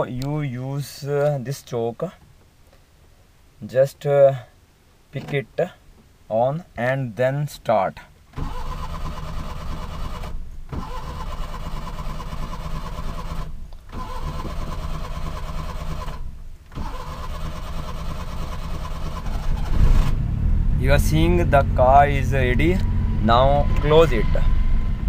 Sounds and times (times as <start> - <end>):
Vehicle: 8.3 - 25.0.